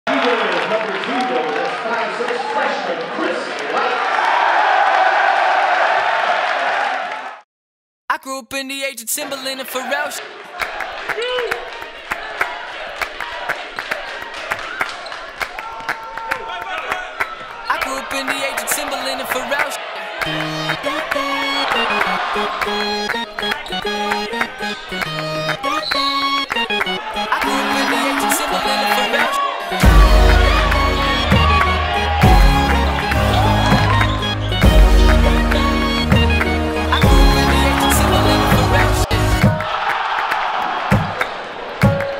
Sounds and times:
Speech: 0.1 - 4.0, 8.1 - 10.2, 17.7 - 19.8, 27.4 - 29.4.

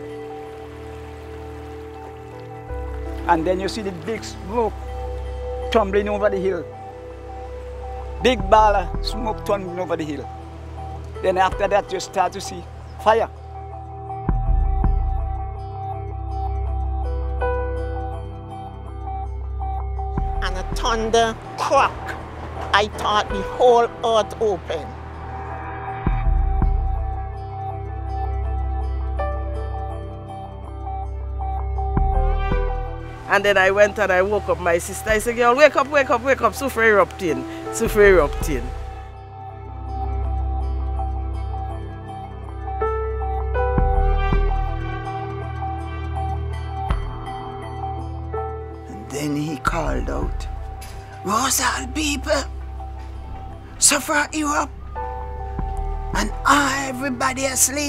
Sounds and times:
Music: 0.0 - 57.8.

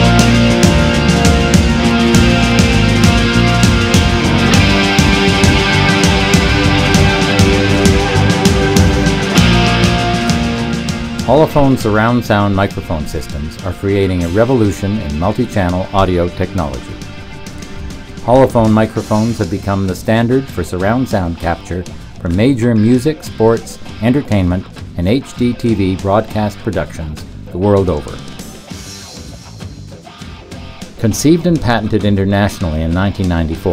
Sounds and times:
Music: 0.0 - 33.7
Speech: 11.3 - 17.0, 18.2 - 28.3, 31.0 - 33.7.

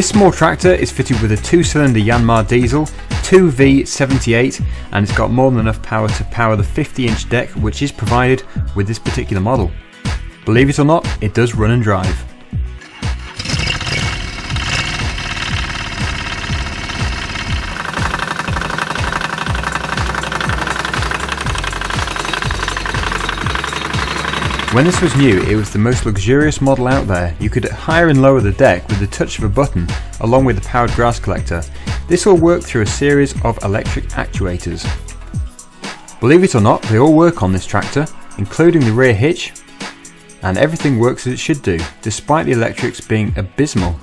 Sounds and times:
Lawn mower: 12.8 - 25.8
Vehicle: 13.2 - 25.7.

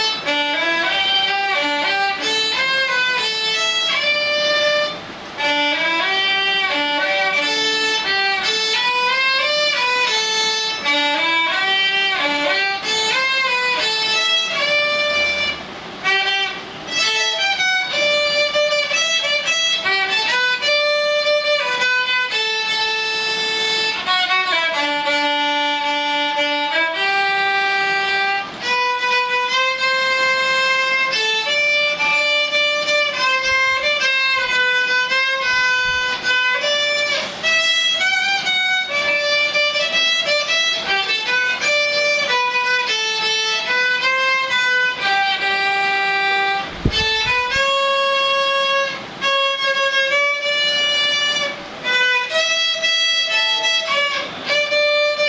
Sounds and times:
Violin, fiddle: 0.0 - 55.2.

